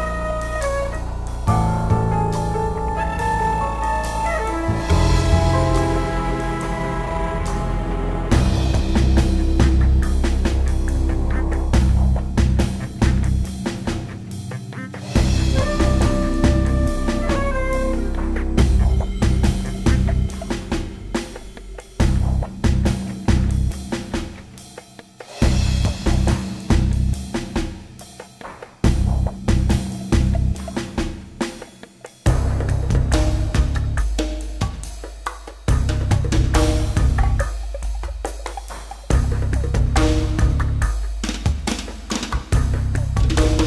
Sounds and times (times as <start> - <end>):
Music: 0.0 - 43.6.